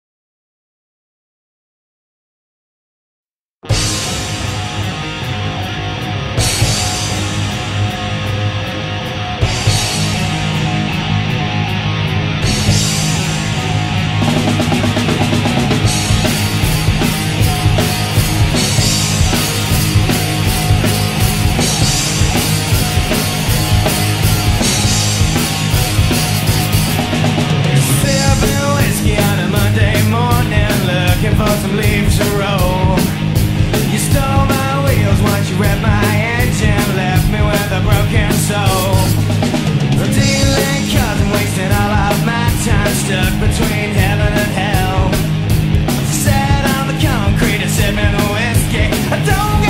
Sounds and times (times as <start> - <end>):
Blues: 3.6 - 49.7.